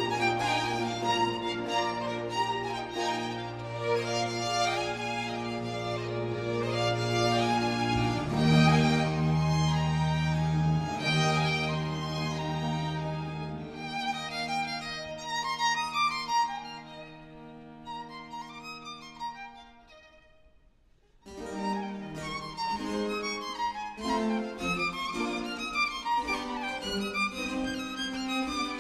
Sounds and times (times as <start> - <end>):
Violin, fiddle: 0.0 - 20.6, 21.2 - 28.8.